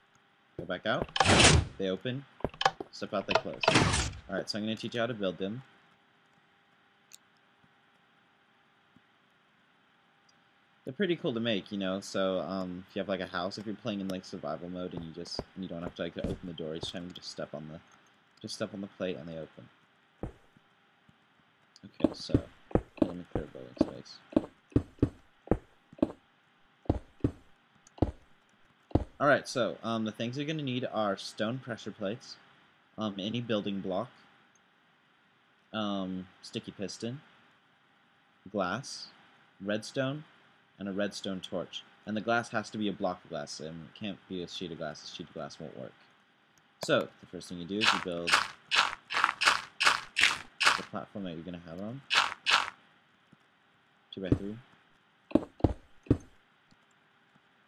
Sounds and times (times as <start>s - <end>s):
Speech: 0.6s - 1.1s, 1.7s - 2.3s, 2.9s - 5.7s, 10.9s - 17.8s, 18.4s - 19.7s, 21.8s - 24.3s, 29.2s - 32.4s, 33.0s - 34.2s, 35.8s - 37.3s, 38.5s - 46.0s, 46.8s - 48.4s, 50.8s - 52.1s, 54.2s - 54.6s.